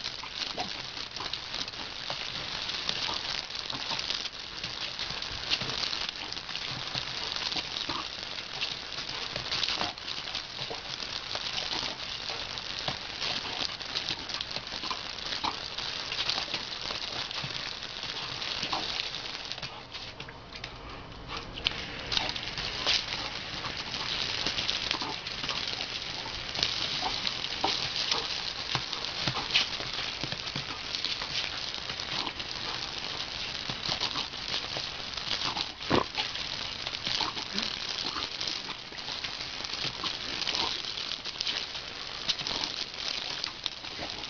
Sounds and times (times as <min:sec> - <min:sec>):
Gurgling: 0:00.0 - 0:19.9, 0:21.7 - 0:44.2
Dog: 0:00.1 - 0:44.2.